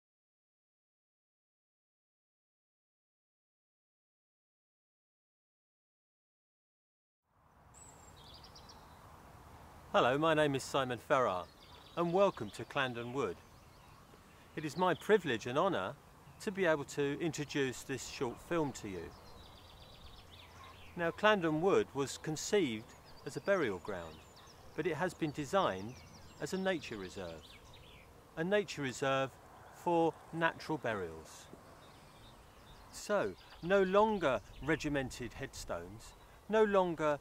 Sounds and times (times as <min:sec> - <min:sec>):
Speech: 0:10.0 - 0:13.4, 0:14.6 - 0:19.1, 0:21.0 - 0:24.2, 0:24.8 - 0:27.4, 0:28.4 - 0:31.5, 0:32.9 - 0:37.2.